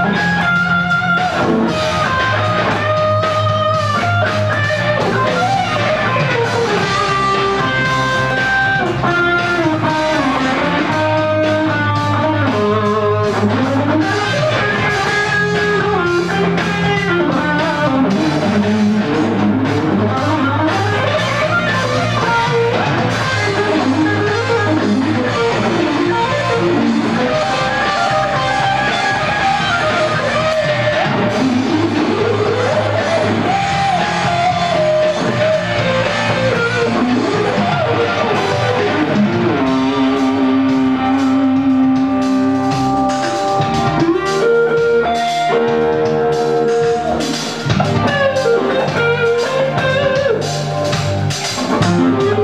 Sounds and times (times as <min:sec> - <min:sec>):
Electric guitar: 0:00.0 - 0:52.4.